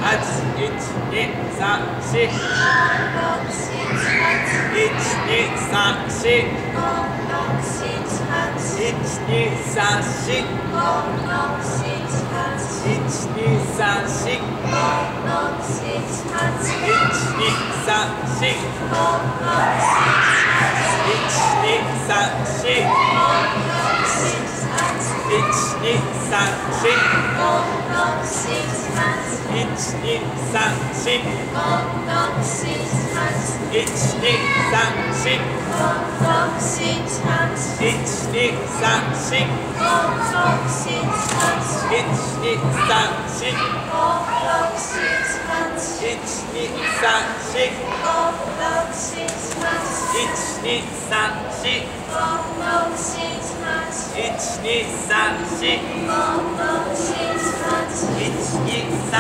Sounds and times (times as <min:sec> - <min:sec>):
Inside, large room or hall: 0:00.0 - 0:59.2
Speech: 0:00.0 - 0:59.2.